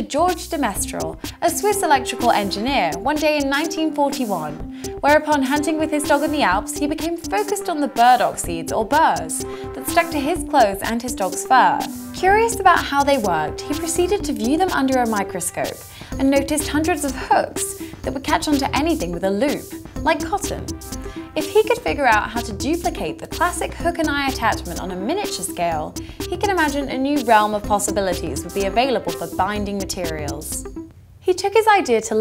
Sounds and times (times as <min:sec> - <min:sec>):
Speech: 0:00.0 - 0:20.7, 0:21.4 - 0:30.6, 0:31.2 - 0:32.2
Music: 0:00.0 - 0:32.2.